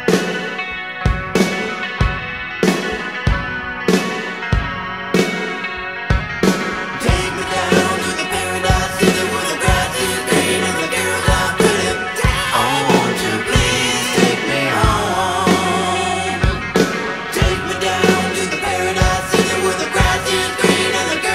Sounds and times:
Independent music: 0.0 - 21.3.

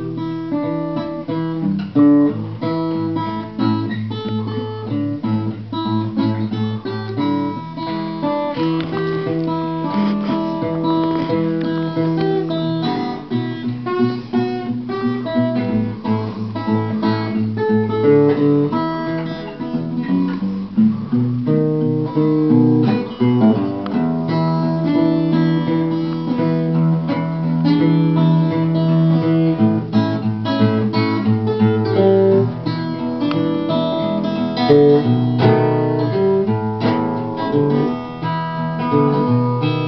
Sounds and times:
Acoustic guitar: 0.0 - 39.8
Blues: 0.0 - 39.8
Strum: 0.0 - 39.8.

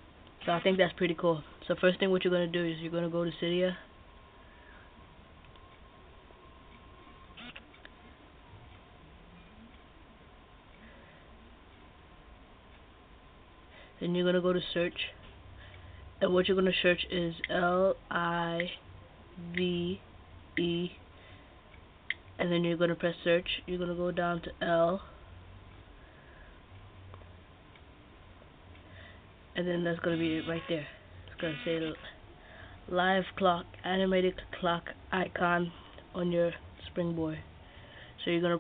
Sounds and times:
Speech: 0.4 - 3.9, 14.0 - 15.2, 16.2 - 18.8, 19.4 - 20.0, 20.6 - 21.0, 22.4 - 25.1, 29.6 - 32.2, 32.9 - 37.5, 38.2 - 38.6.

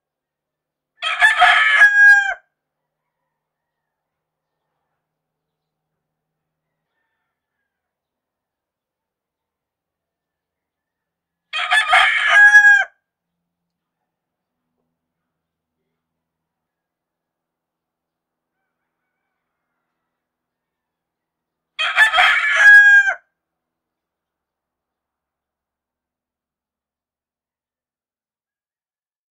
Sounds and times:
Crowing, cock-a-doodle-doo: 1.0 - 4.7, 6.6 - 8.0, 10.3 - 13.1, 18.5 - 21.1, 21.8 - 23.4.

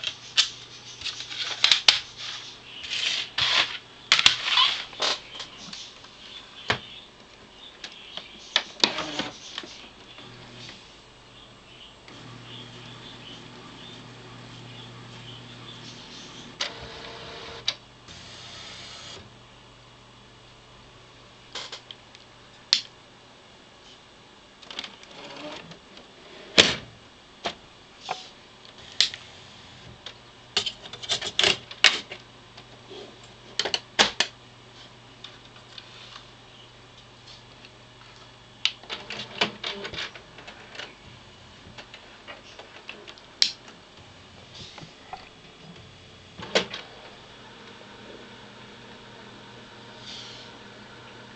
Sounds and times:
Printer: 10.2 - 10.8, 12.1 - 19.3, 24.7 - 25.8, 38.9 - 41.0, 46.4 - 51.3.

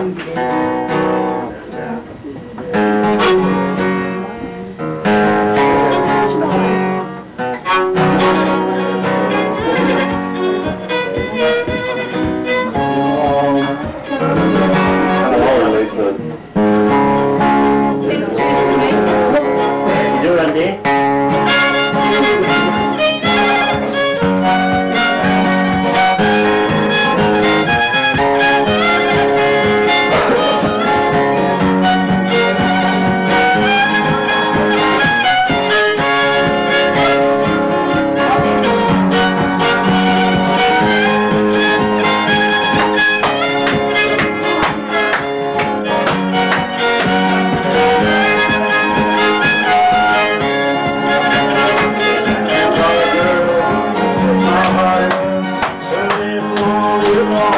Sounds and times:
Violin, fiddle: 0.0 - 57.5
Speech: 1.4 - 2.9, 12.8 - 16.3, 18.0 - 20.9, 51.3 - 55.3.

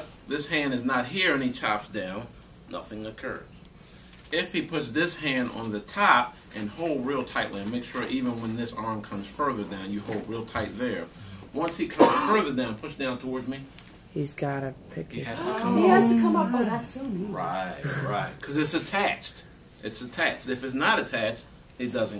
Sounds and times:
Speech: 4.3 - 22.1.

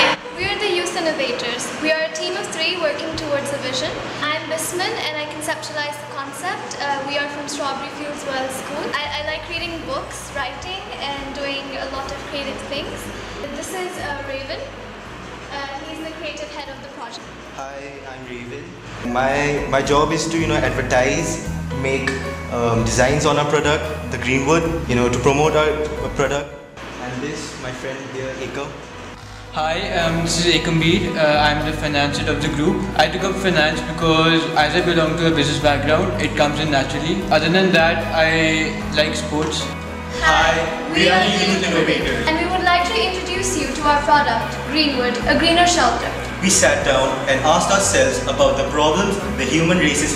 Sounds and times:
Music: 0.0 - 50.1
Speech: 17.6 - 28.7, 29.6 - 39.6, 40.2 - 44.1, 44.8 - 50.1.

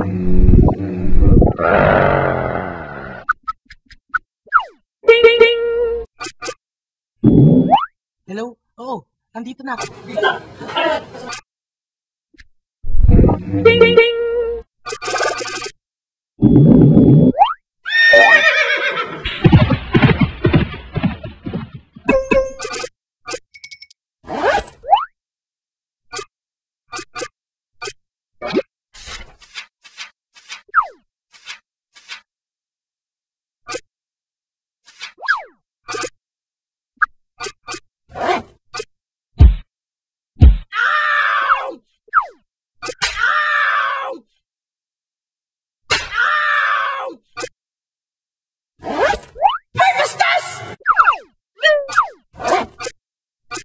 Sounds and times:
Sound effect: 0.0 - 2.2, 3.2 - 4.8, 6.1 - 6.6, 7.2 - 7.9, 12.8 - 15.8, 16.4 - 17.6, 19.2 - 25.2, 26.1 - 26.3, 26.9 - 32.3, 34.9 - 36.2, 37.0 - 39.7, 42.1 - 43.2, 48.8 - 53.6.

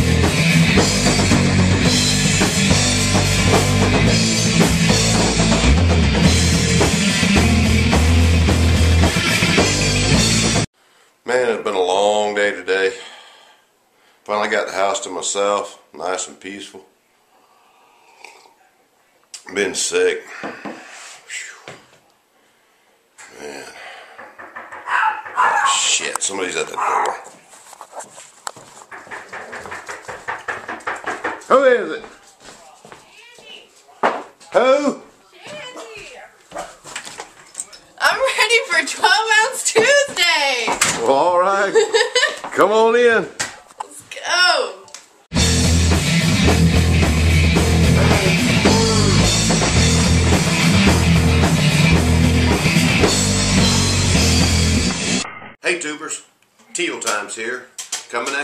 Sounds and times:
Bark: 24.8 - 25.9, 26.8 - 27.3
Canidae, dogs, wolves: 24.8 - 25.9, 26.7 - 28.1
Yip: 24.9 - 25.8, 26.8 - 27.3.

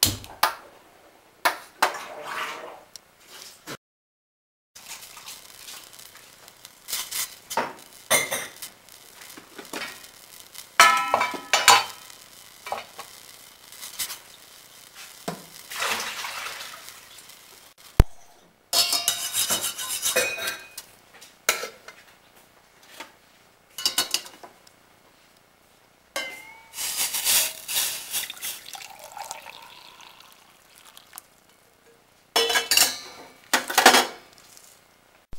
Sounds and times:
Sizzle: 4.8 - 18.0, 23.7 - 35.3
Trickle, dribble: 15.7 - 17.0, 28.2 - 31.6
Water: 15.7 - 17.1, 28.2 - 31.3.

